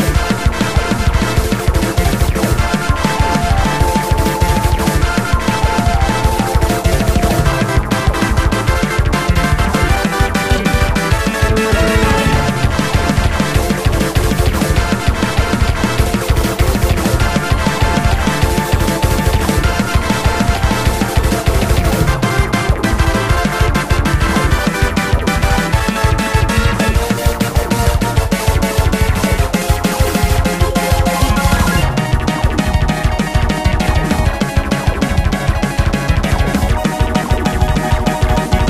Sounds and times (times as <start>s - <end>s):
Video game music: 0.0s - 38.6s.